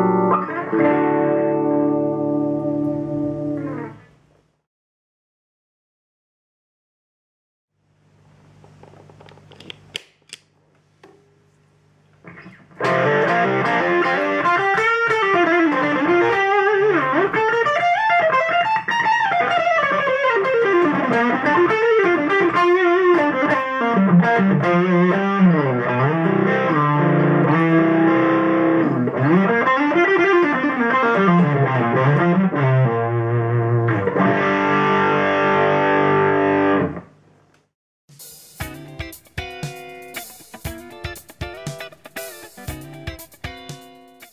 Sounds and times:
Guitar: 0:00.0 - 0:04.2, 0:12.1 - 0:37.2, 0:38.2 - 0:44.3
Effects unit: 0:00.0 - 0:04.3, 0:11.1 - 0:37.3, 0:38.1 - 0:44.3.

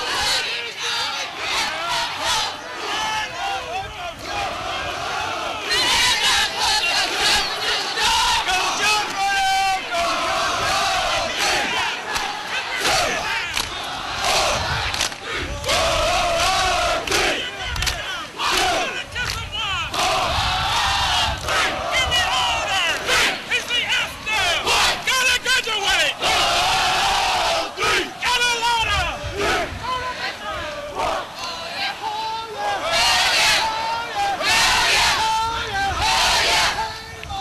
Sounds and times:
Speech: 0:17.1 - 0:20.0, 0:21.8 - 0:26.2, 0:27.8 - 0:32.8.

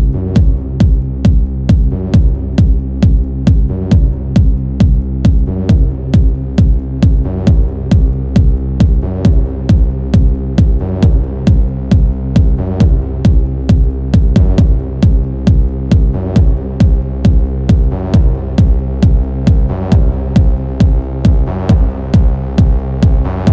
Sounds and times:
Techno: 0:00.0 - 0:23.5.

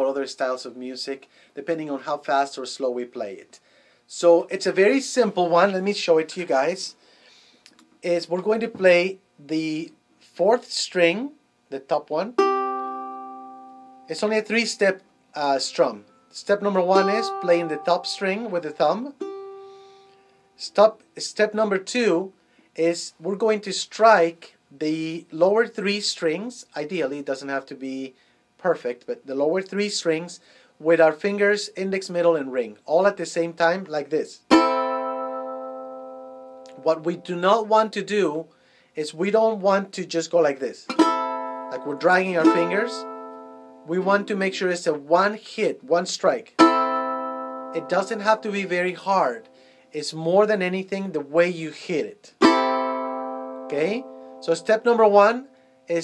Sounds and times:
Speech: 0:00.0 - 0:07.0, 0:08.0 - 0:12.4, 0:14.1 - 0:19.2, 0:20.6 - 0:34.5, 0:36.7 - 0:40.9, 0:41.7 - 0:43.0, 0:43.9 - 0:46.5, 0:47.8 - 0:52.4, 0:53.7 - 0:56.0
Guitar: 0:12.4 - 0:20.6, 0:34.5 - 0:37.3, 0:40.9 - 0:45.0, 0:46.4 - 0:49.9, 0:52.3 - 0:56.0.

